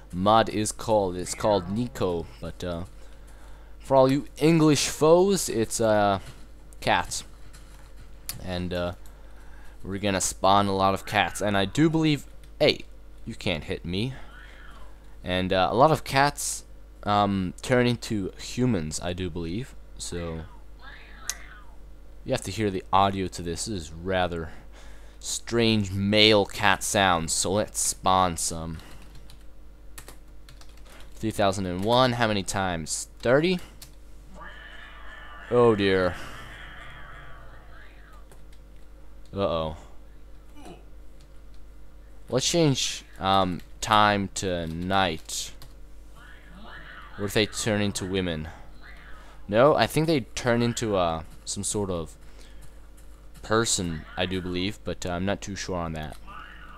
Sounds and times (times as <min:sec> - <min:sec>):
Computer keyboard: 0:28.7 - 0:32.0.